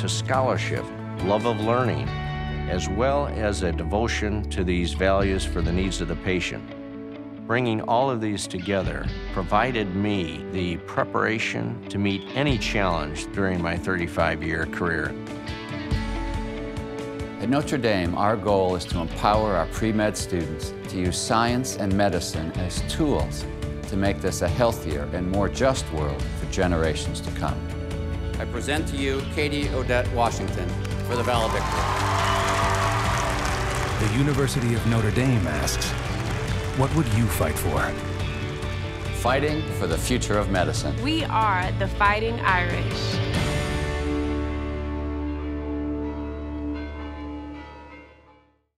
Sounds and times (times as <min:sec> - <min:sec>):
Bell: 0:46.8 - 0:48.6.